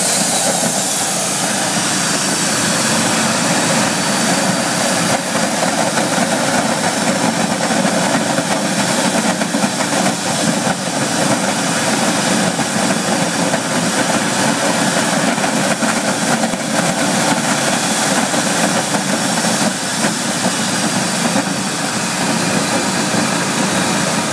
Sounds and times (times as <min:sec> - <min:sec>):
Jet engine: 0:00.0 - 0:24.3.